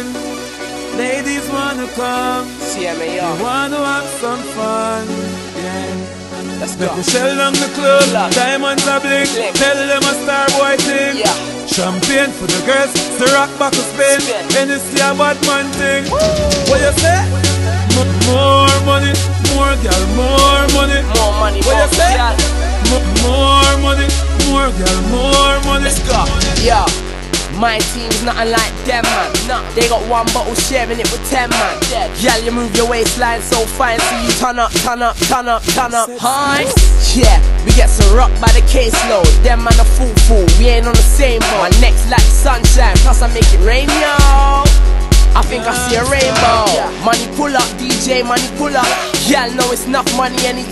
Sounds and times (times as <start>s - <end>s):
Music: 0.0s - 50.7s.